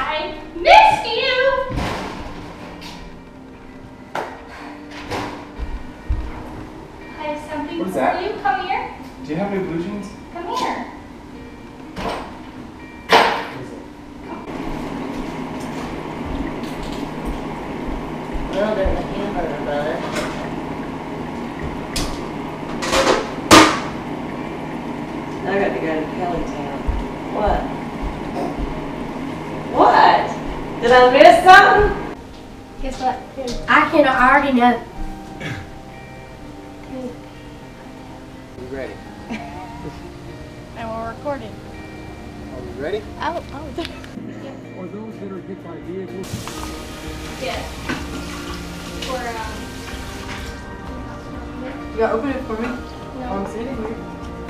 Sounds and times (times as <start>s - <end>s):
Music: 0.0s - 54.4s.